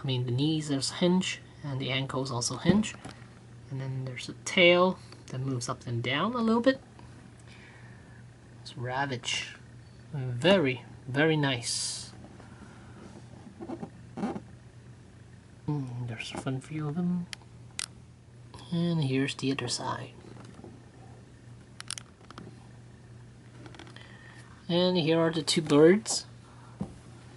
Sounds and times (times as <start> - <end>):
Speech: 0.0 - 3.0, 3.7 - 6.8, 8.6 - 12.2, 15.7 - 17.3, 18.6 - 20.2, 24.7 - 26.3.